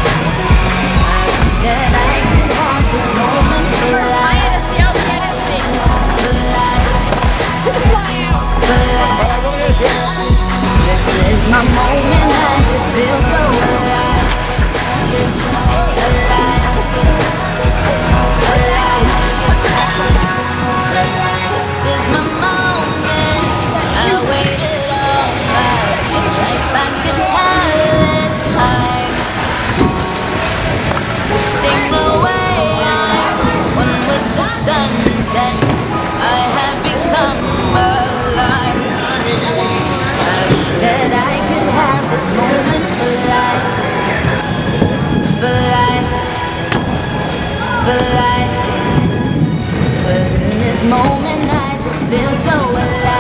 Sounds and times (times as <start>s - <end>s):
Music: 0.0s - 53.2s.